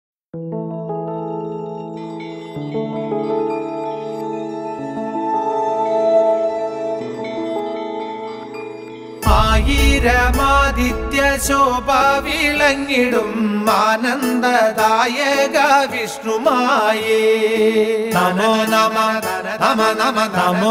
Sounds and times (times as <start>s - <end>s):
Music: 0.4s - 20.7s
Singing: 9.2s - 20.7s.